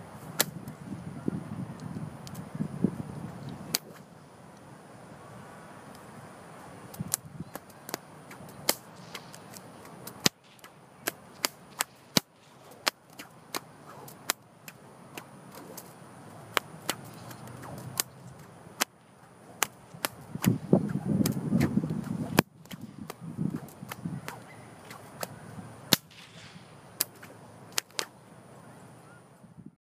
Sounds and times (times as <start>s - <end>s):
Whip: 0.4s - 0.6s, 3.7s - 4.0s, 7.0s - 15.9s, 16.5s - 18.2s, 19.6s - 28.2s.